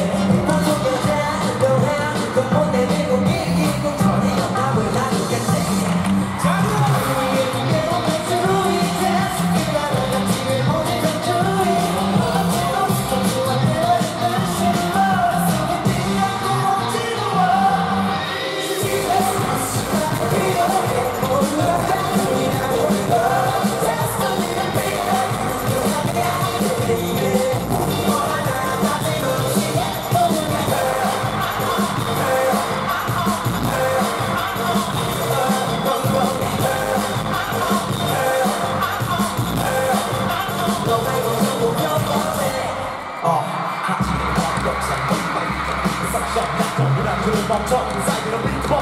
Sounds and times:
Music: 0.0s - 48.8s.

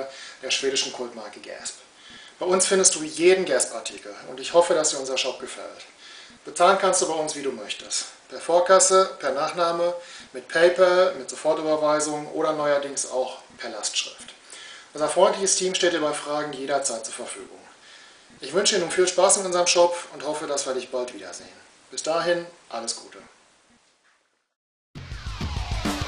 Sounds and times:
Speech: 0.0s - 1.8s, 2.4s - 14.4s, 15.0s - 17.7s, 18.4s - 23.4s
Music: 25.0s - 26.0s.

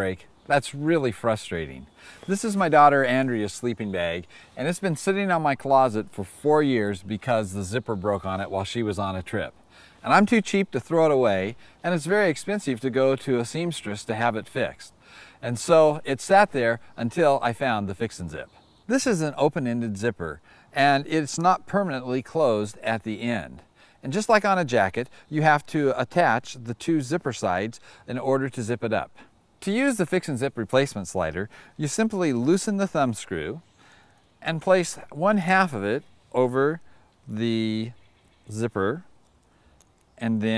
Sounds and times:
Speech: 0.0s - 33.6s, 34.4s - 39.1s, 40.2s - 40.5s.

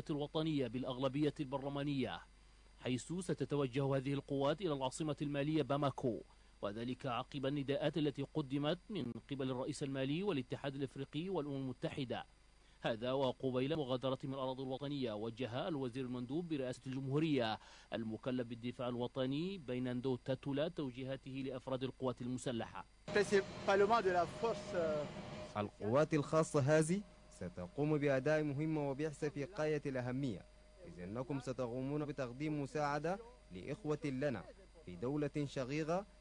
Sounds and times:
Speech: 0.0s - 36.1s.

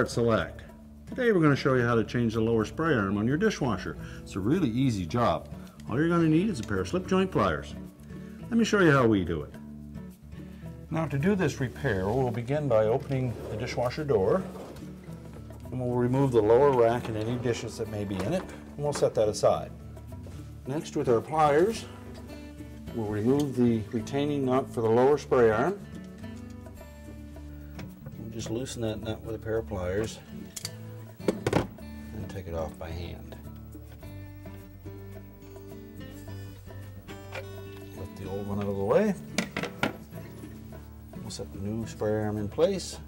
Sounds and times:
Speech: 0.0s - 7.8s, 8.5s - 9.6s, 10.9s - 14.5s, 15.7s - 19.7s, 20.7s - 21.9s, 23.0s - 25.8s, 28.2s - 30.3s, 32.1s - 33.4s, 38.0s - 39.2s, 41.2s - 43.0s
Music: 0.0s - 43.0s.

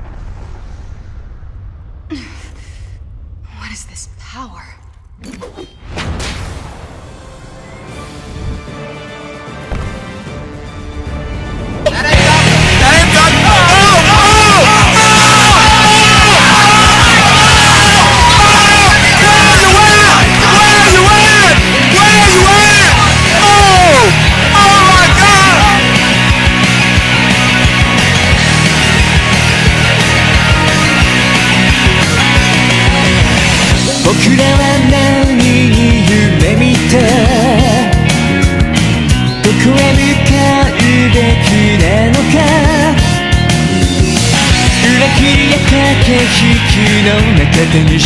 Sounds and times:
Music: 6.4s - 48.0s.

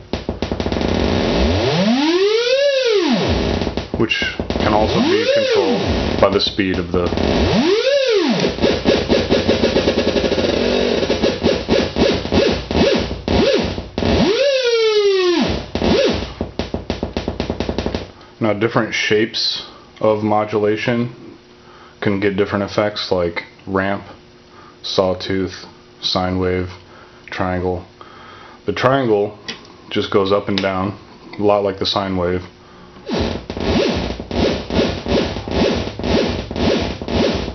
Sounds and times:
Synthesizer: 0.0s - 18.1s
Speech: 4.0s - 7.2s, 18.4s - 21.3s, 22.0s - 24.2s, 24.8s - 27.9s, 28.6s - 32.5s.

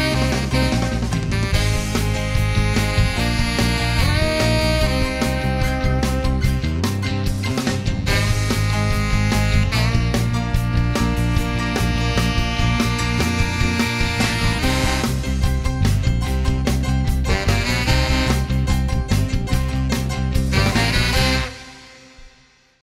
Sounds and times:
Music: 0.0s - 22.8s.

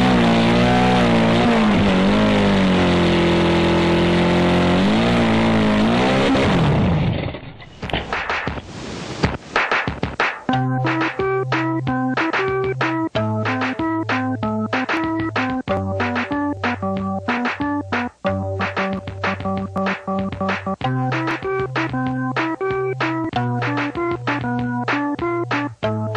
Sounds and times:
Music: 8.0s - 26.1s.

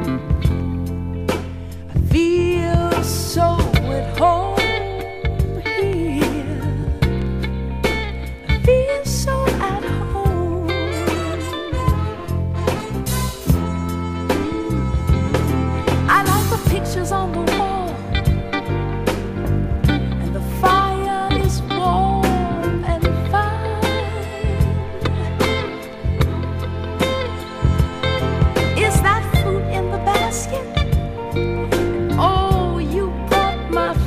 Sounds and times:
Soul music: 0.0s - 34.0s.

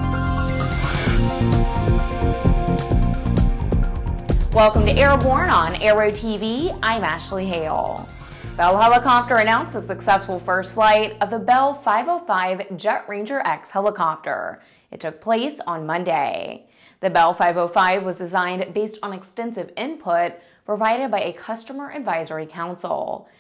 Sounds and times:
Speech: 4.6s - 8.0s, 8.6s - 23.2s.

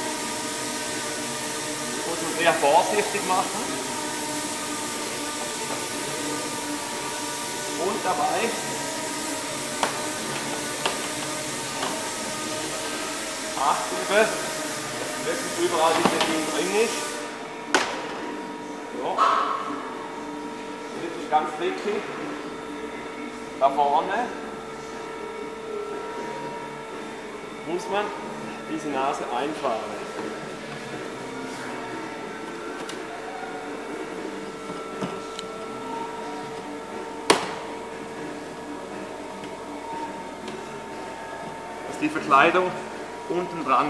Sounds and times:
Speech: 2.0s - 3.7s, 7.8s - 8.6s, 15.2s - 17.0s, 42.0s - 43.8s.

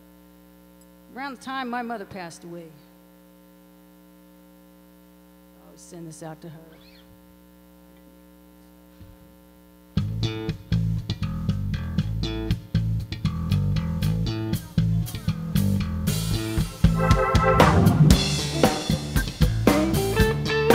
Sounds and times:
Bass drum: 10.8s - 20.4s
Drum kit: 11.5s - 20.7s.

